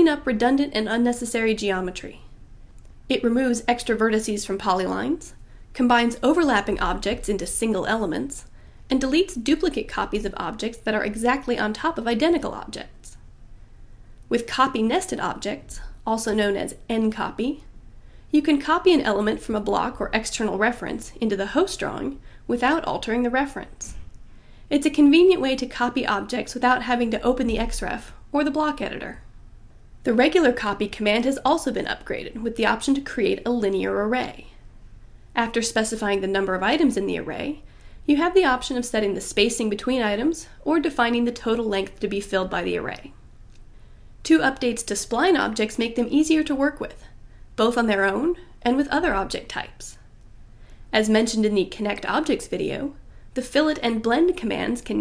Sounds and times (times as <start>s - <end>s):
Speech: 0.0s - 2.3s, 3.1s - 13.2s, 14.3s - 17.7s, 18.4s - 24.0s, 24.7s - 29.2s, 30.0s - 34.6s, 35.4s - 43.2s, 44.2s - 50.0s, 50.9s - 55.0s.